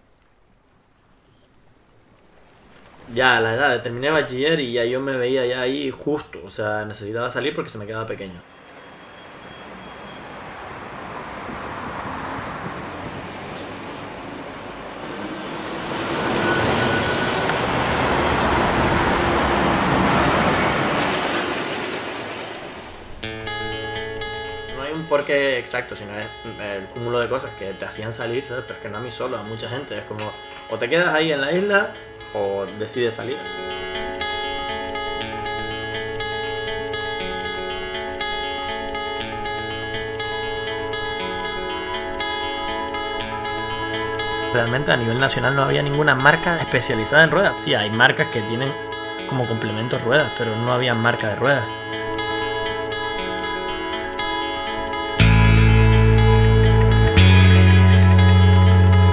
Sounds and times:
Speech: 3.1 - 8.4, 24.8 - 33.5, 44.5 - 51.7
Music: 23.2 - 59.1.

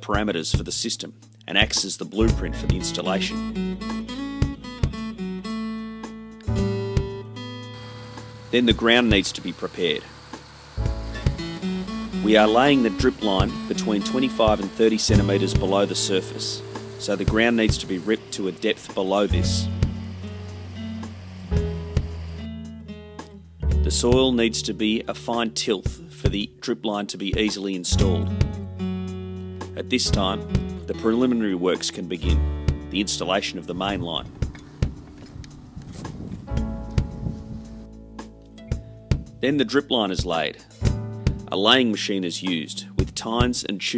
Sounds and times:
Speech: 0.0 - 3.4, 8.5 - 10.1, 12.2 - 19.7, 23.8 - 28.3, 29.8 - 34.3, 39.4 - 40.7, 41.5 - 43.9
Music: 0.0 - 43.9.

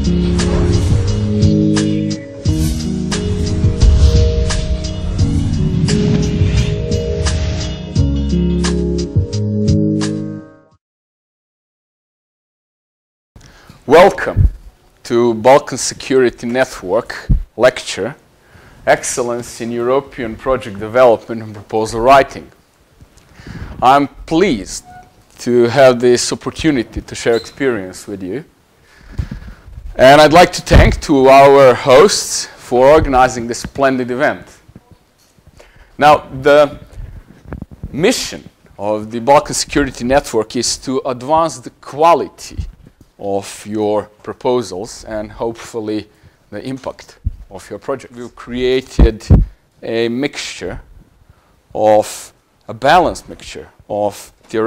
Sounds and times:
Speech: 13.9 - 18.2, 18.9 - 22.6, 23.8 - 28.5, 30.0 - 35.0, 36.0 - 36.9, 37.9 - 50.9, 51.7 - 54.6.

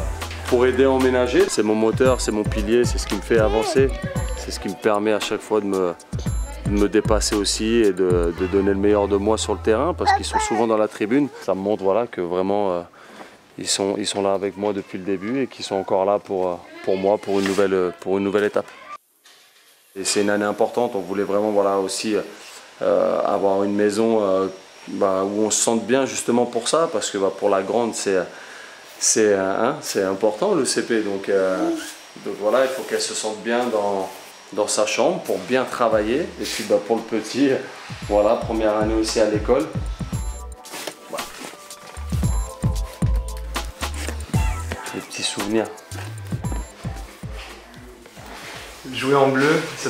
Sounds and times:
Music: 0.0 - 10.6, 35.9 - 36.4, 37.8 - 49.8
Speech: 0.5 - 12.4, 29.0 - 39.8, 48.8 - 49.8.

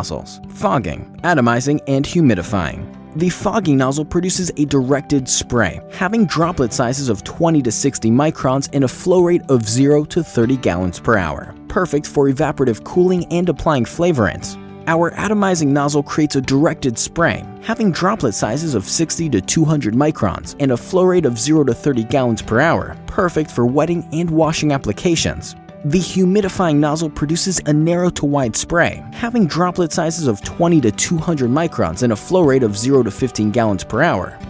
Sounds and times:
Music: 0.0 - 34.4
Speech: 0.0 - 34.4.

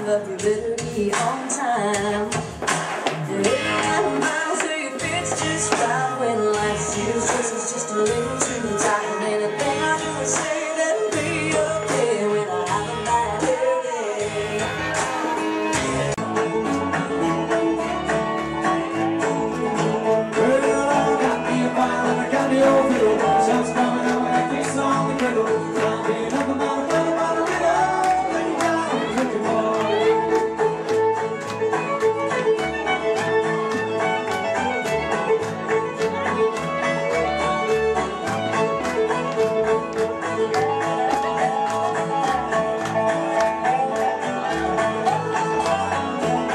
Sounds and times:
Country: 0.0 - 46.5.

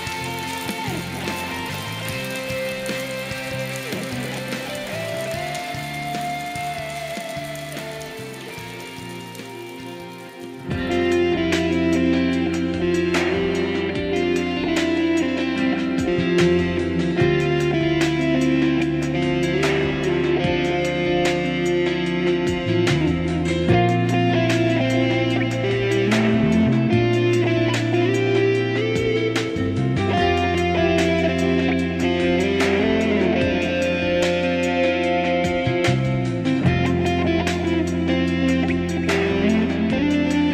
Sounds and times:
Acoustic guitar: 0.0 - 40.5
Electric guitar: 0.0 - 40.5.

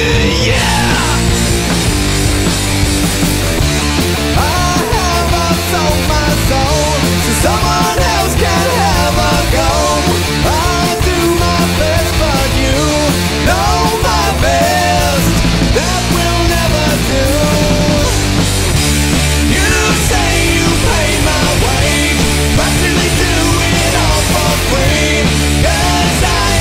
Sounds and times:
Blues: 0.0 - 26.6
Rhythm and blues: 0.0 - 26.6.

